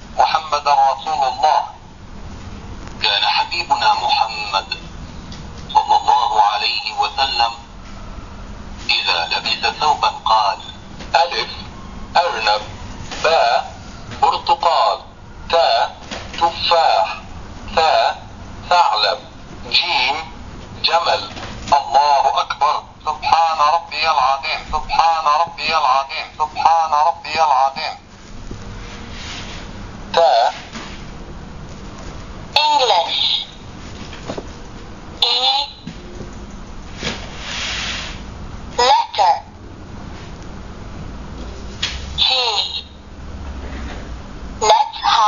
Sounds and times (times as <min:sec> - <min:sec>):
Speech: 0:00.2 - 0:01.8, 0:03.0 - 0:04.8, 0:05.7 - 0:07.7, 0:08.9 - 0:28.0, 0:30.1 - 0:30.7, 0:32.6 - 0:33.6, 0:35.2 - 0:35.8, 0:38.8 - 0:39.5, 0:42.2 - 0:43.0, 0:44.6 - 0:45.2.